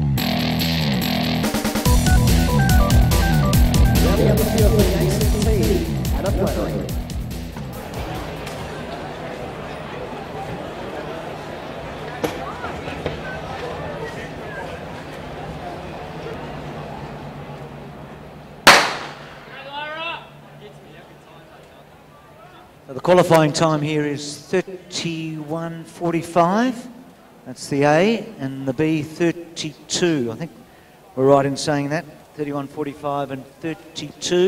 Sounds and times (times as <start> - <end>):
Outside, urban or manmade: 0.0 - 34.4
Speech: 4.0 - 7.0, 19.5 - 34.4.